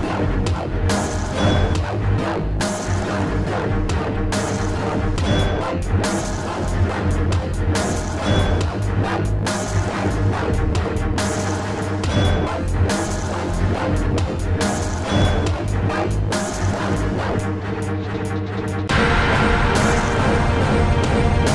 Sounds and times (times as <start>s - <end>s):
Dubstep: 0.0s - 21.5s.